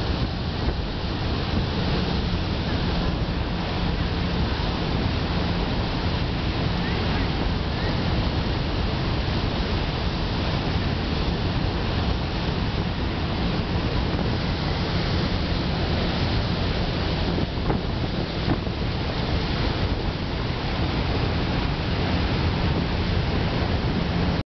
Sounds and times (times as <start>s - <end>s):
Motorboat, speedboat: 0.0s - 24.4s.